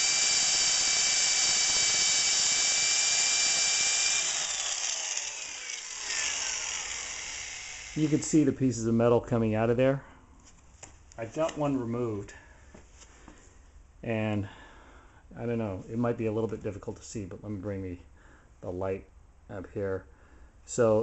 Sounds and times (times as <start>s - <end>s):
Drill: 0.0s - 8.5s
Speech: 8.0s - 10.1s, 11.2s - 12.4s, 14.0s - 14.5s, 15.4s - 18.0s, 18.6s - 20.1s, 20.7s - 21.0s.